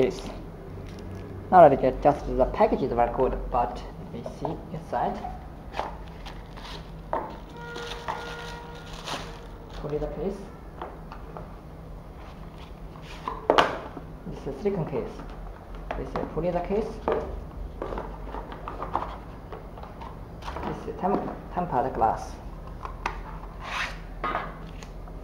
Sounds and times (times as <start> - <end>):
Speech: 0.0 - 0.4, 1.5 - 5.4, 9.8 - 10.5, 14.3 - 15.3, 15.9 - 17.2, 20.6 - 22.4.